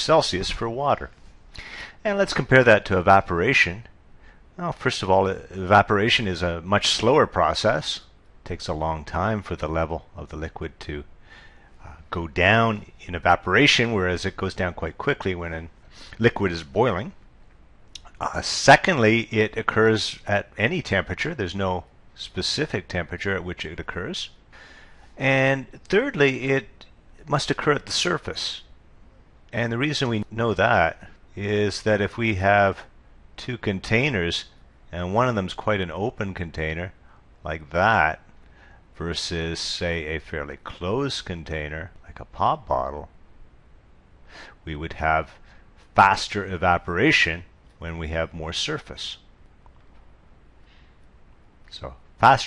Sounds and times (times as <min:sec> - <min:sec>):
Speech: 0:00.0 - 0:01.2, 0:02.0 - 0:03.9, 0:04.6 - 0:11.1, 0:11.8 - 0:17.2, 0:18.0 - 0:24.4, 0:25.2 - 0:28.7, 0:29.5 - 0:38.3, 0:39.0 - 0:43.1, 0:44.6 - 0:49.3, 0:51.7 - 0:52.4.